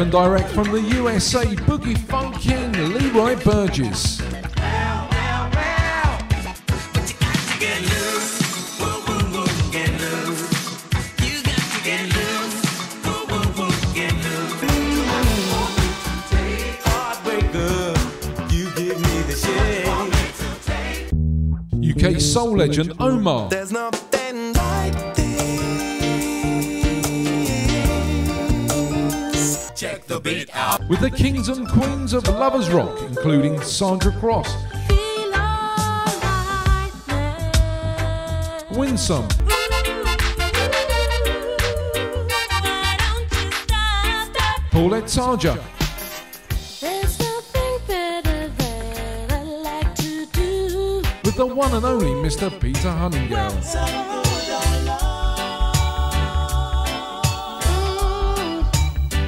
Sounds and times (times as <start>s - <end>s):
Reggae: 0.0s - 59.2s
Soul music: 0.0s - 59.2s.